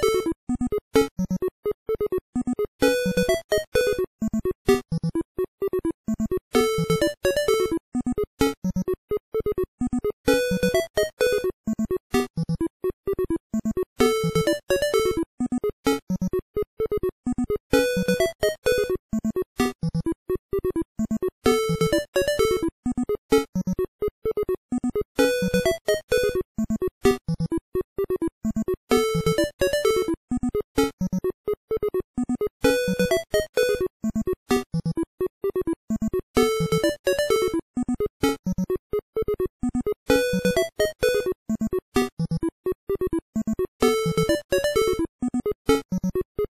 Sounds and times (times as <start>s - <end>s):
Music: 0.0s - 46.5s.